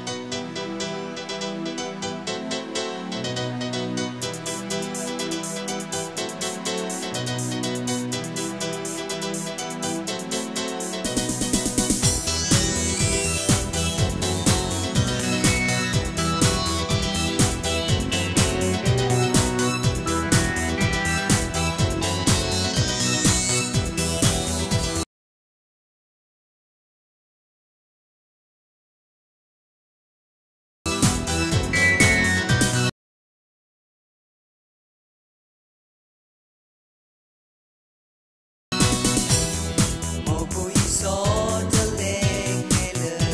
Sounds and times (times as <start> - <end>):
Music: 0.0 - 25.1, 30.9 - 33.0, 38.7 - 43.3.